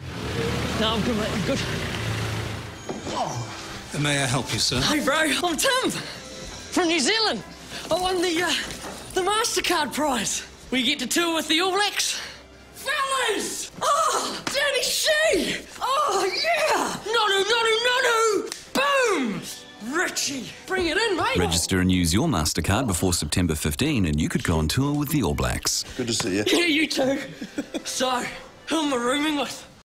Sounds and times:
Music: 0.0s - 29.8s
Speech: 21.3s - 26.6s.

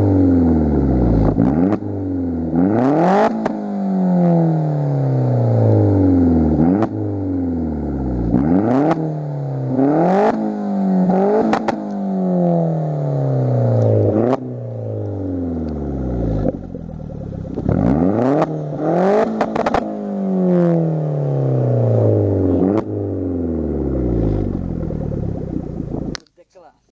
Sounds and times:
Accelerating, revving, vroom: 0.0s - 7.2s, 8.2s - 14.5s, 17.6s - 24.7s
Car: 0.0s - 26.4s.

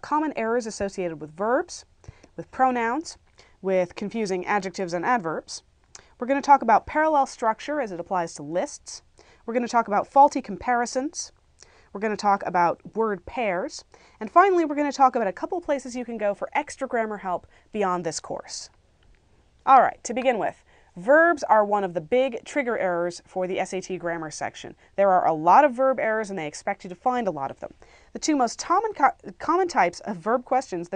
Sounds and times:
Speech: 0.0s - 18.8s, 19.6s - 30.9s.

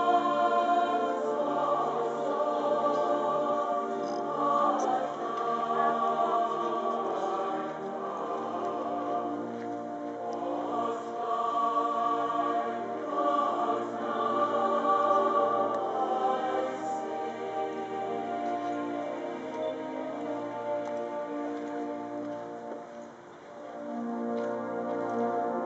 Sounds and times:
Inside, public space: 0.0s - 25.6s
Music: 0.0s - 25.6s.

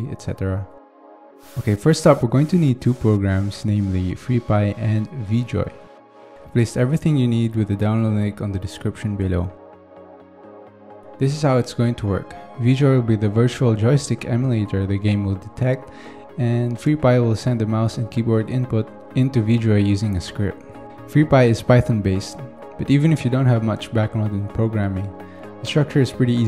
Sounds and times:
Speech: 0.0s - 0.7s, 1.6s - 5.8s, 6.5s - 9.6s, 11.2s - 26.4s
Music: 0.0s - 26.4s.

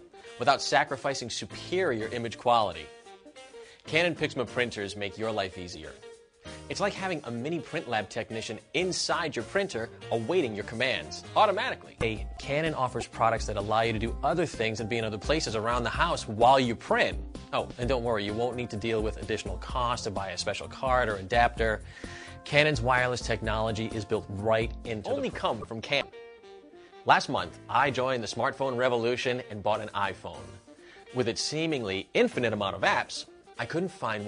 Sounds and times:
Music: 0.0s - 34.2s
Speech: 0.4s - 2.9s, 3.9s - 6.0s, 6.7s - 21.8s, 22.4s - 26.1s, 27.1s - 30.5s, 31.2s - 34.2s.

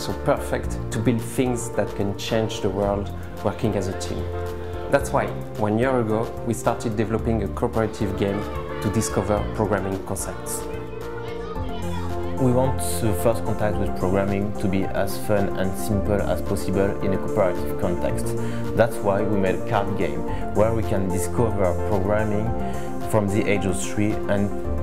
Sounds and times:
Speech: 0.0s - 4.3s, 4.9s - 22.5s, 23.1s - 24.5s
Music: 0.0s - 24.8s.

